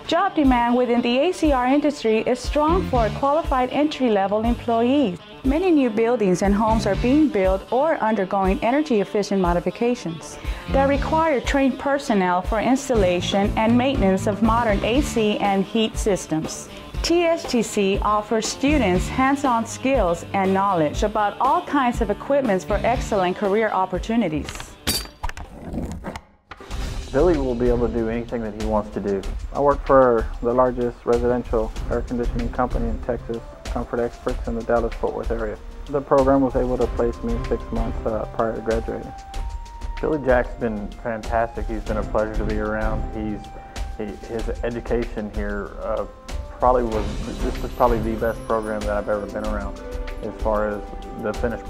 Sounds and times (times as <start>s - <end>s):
Music: 0.0s - 25.5s, 26.5s - 51.7s
Speech: 0.1s - 24.7s, 27.1s - 39.1s, 40.0s - 43.4s, 44.0s - 51.7s.